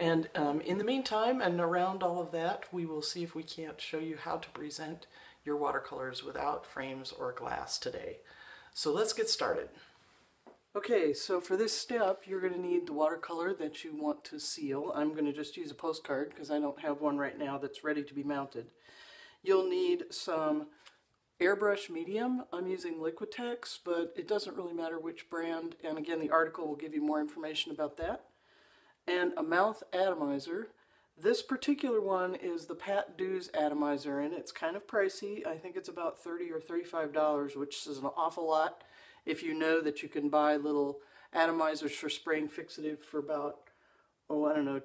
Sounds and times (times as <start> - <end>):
Speech: 0.0 - 9.9, 10.7 - 18.8, 19.4 - 20.8, 21.4 - 28.3, 29.1 - 43.6, 44.3 - 44.8.